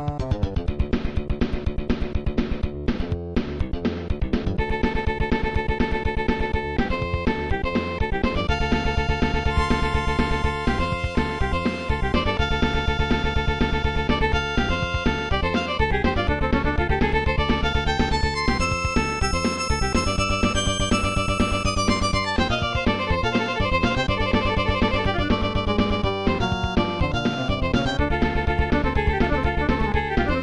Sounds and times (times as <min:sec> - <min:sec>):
Music: 0:00.0 - 0:30.4.